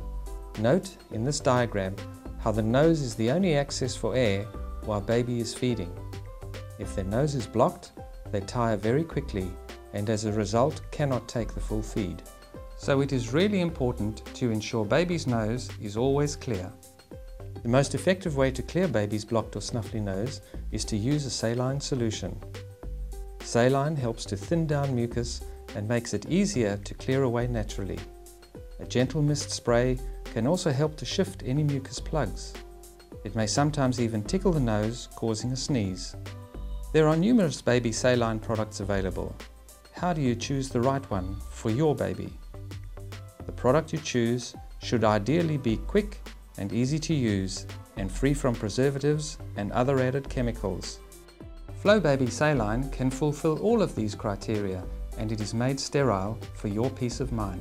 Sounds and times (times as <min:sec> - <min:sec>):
Music: 0:00.0 - 0:57.6
Speech: 0:00.6 - 0:05.9, 0:06.8 - 0:16.8, 0:17.6 - 0:22.4, 0:23.5 - 0:28.1, 0:28.8 - 0:32.6, 0:33.3 - 0:36.2, 0:37.0 - 0:39.4, 0:40.0 - 0:42.4, 0:43.5 - 0:51.0, 0:51.8 - 0:57.6.